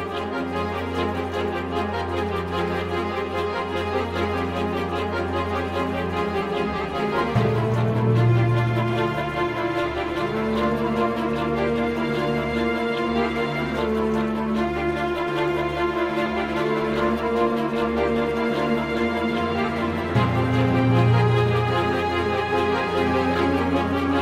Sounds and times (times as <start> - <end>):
Scary music: 0.0 - 24.2.